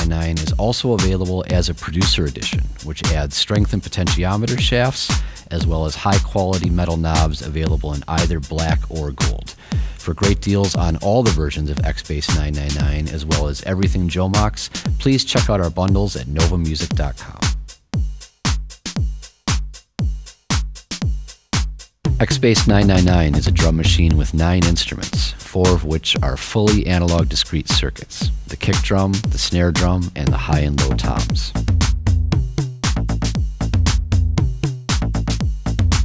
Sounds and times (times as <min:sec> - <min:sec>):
Speech: 0:00.0 - 0:17.5, 0:22.2 - 0:31.6.